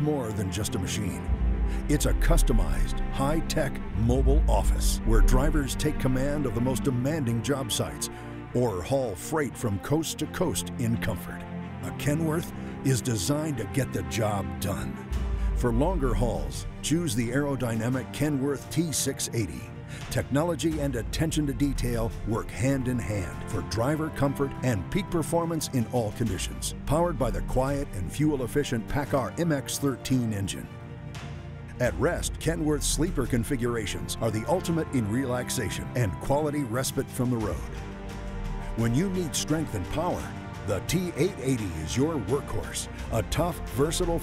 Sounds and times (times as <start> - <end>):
Speech: 0.0 - 15.0, 15.6 - 30.7, 31.8 - 37.8, 38.8 - 44.2
Music: 0.0 - 44.2.